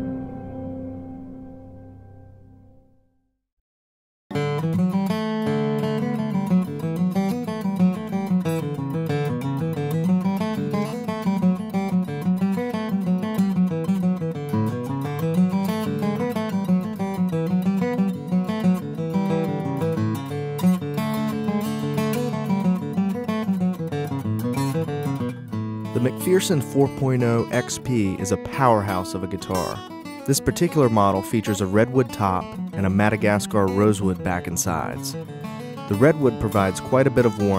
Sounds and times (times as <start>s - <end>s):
Acoustic guitar: 0.0s - 2.9s, 4.3s - 37.5s
Speech: 26.0s - 35.2s, 35.9s - 37.5s.